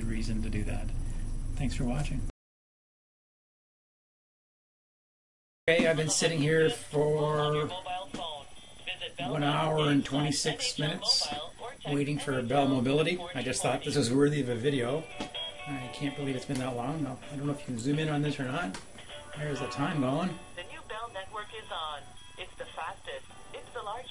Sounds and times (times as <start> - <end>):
Speech: 0.0 - 0.9, 1.6 - 2.3, 5.7 - 8.4, 9.2 - 15.0, 15.7 - 18.8, 19.4 - 20.4.